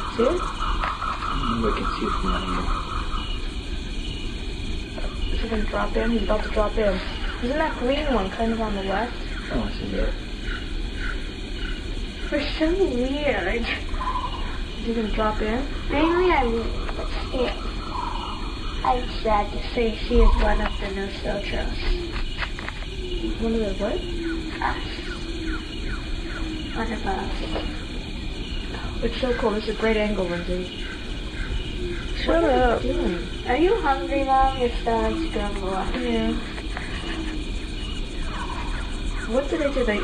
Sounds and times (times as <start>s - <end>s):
Speech: 1.4s - 2.7s, 5.4s - 10.1s, 12.3s - 13.8s, 14.8s - 16.7s, 17.4s - 17.6s, 18.9s - 21.9s, 28.8s - 30.7s, 32.2s - 36.5s, 39.3s - 40.0s.